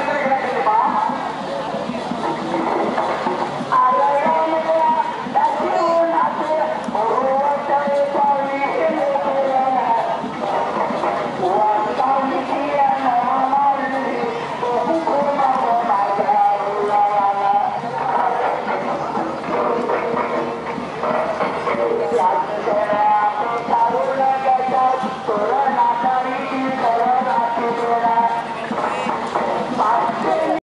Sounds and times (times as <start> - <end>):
Traditional music: 0.0 - 30.6.